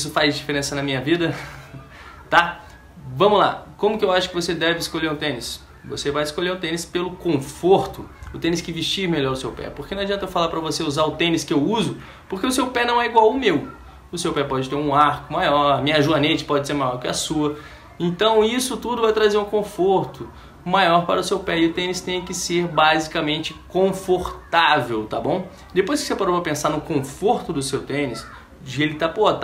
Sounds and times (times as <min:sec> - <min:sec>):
Inside, small room: 0:00.0 - 0:29.4
Speech: 0:02.3 - 0:29.4.